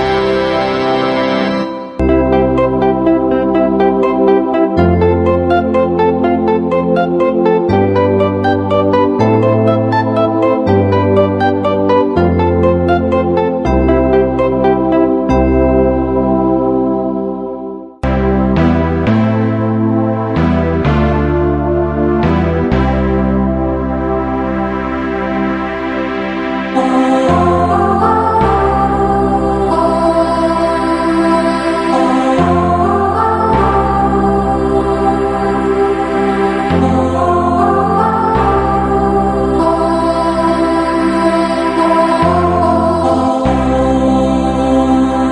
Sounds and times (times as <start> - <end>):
Music: 0.0 - 45.3.